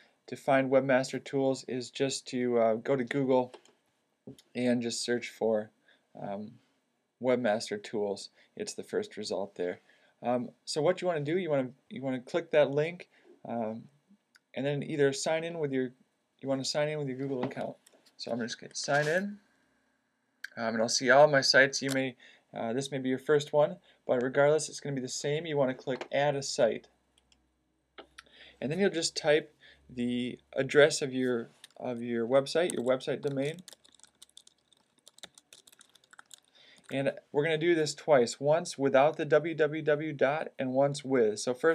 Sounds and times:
Speech: 0.3s - 3.6s, 4.3s - 6.6s, 7.2s - 14.0s, 14.6s - 19.4s, 20.5s - 26.9s, 28.6s - 33.7s, 36.9s - 41.7s.

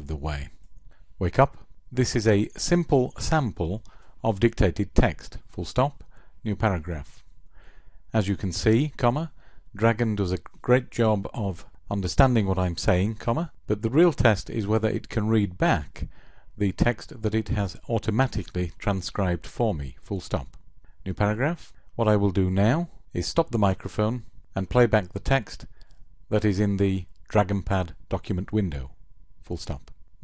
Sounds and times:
Male speech, man speaking: 0.0s - 0.6s, 1.2s - 7.2s, 8.2s - 25.7s, 26.3s - 30.0s
Narration, monologue: 0.0s - 30.2s.

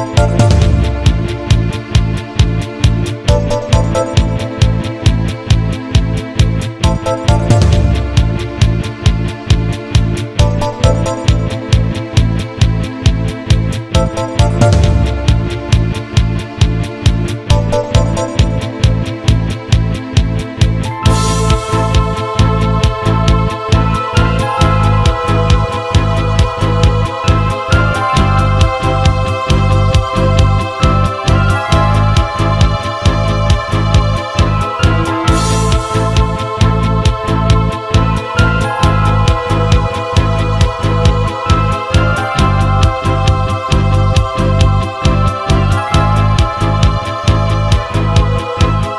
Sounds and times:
Exciting music: 0.0s - 48.9s.

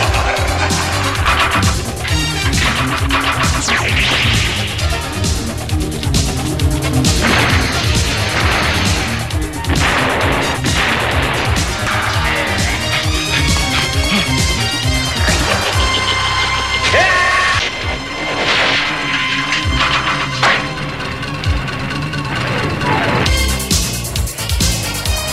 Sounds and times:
Music: 0.0s - 25.3s.

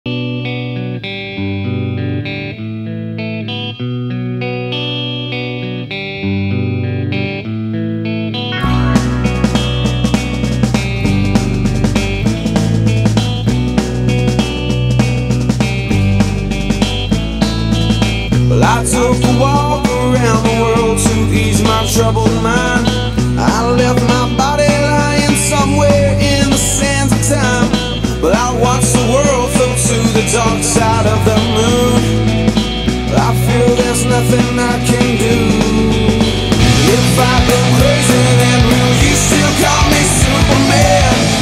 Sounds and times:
Effects unit: 0.0s - 41.4s
Music: 0.0s - 41.4s.

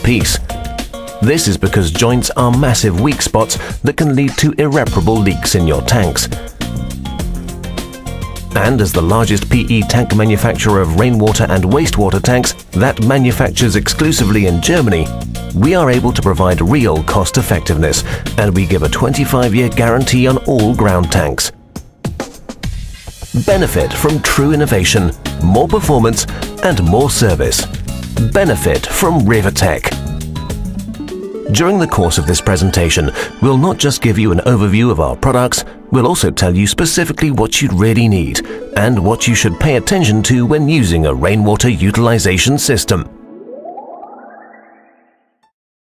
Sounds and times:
Speech: 0.0s - 0.5s, 1.2s - 6.4s, 8.6s - 21.6s, 23.4s - 30.0s, 31.5s - 43.2s
Music: 0.0s - 43.6s.

